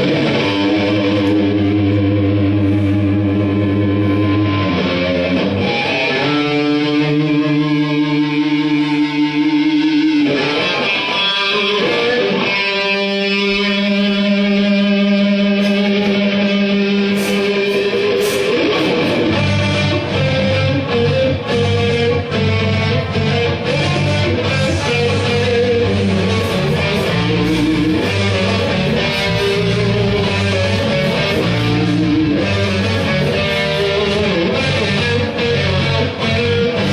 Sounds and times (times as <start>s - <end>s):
Music: 0.0s - 36.9s.